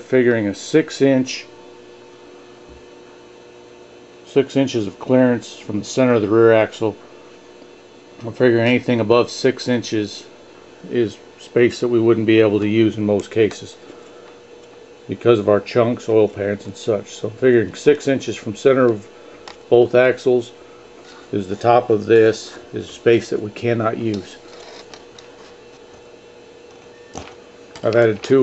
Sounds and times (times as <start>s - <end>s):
Speech: 0.0s - 1.5s, 4.2s - 7.0s, 8.2s - 13.8s, 15.1s - 19.1s, 19.7s - 20.6s, 21.3s - 24.4s, 27.8s - 28.4s.